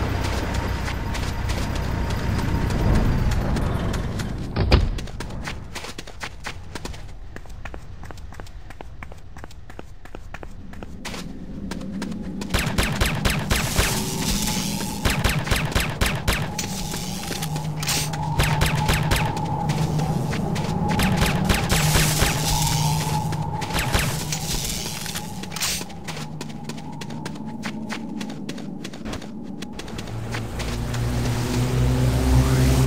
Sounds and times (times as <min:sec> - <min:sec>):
Walk, footsteps: 0:00.1 - 0:12.6, 0:24.4 - 0:31.6.